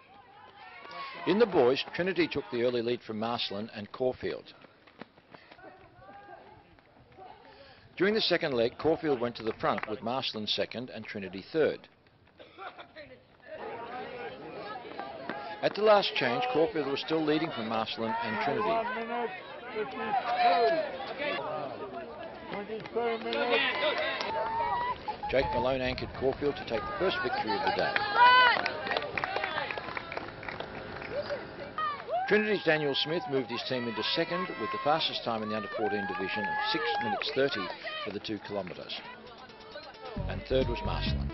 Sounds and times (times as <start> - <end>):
Outside, urban or manmade: 0.0 - 41.3
Run: 0.0 - 41.3
Speech: 8.0 - 11.8, 32.3 - 39.3, 40.0 - 41.3.